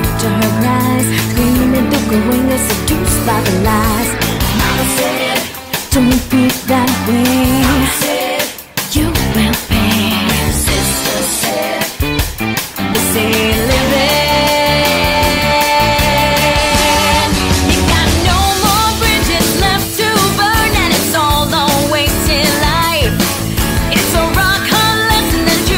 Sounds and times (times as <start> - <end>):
Exciting music: 0.0 - 25.7.